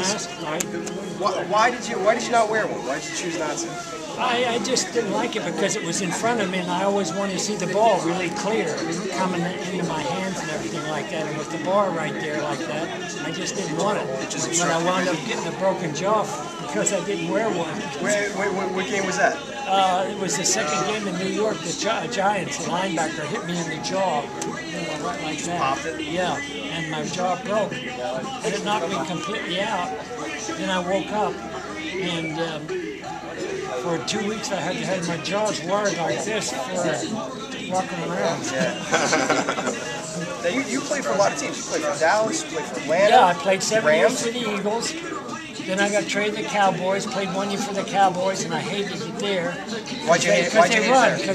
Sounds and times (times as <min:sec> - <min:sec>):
Conversation: 0:00.0 - 0:51.3
Inside, public space: 0:00.0 - 0:51.3.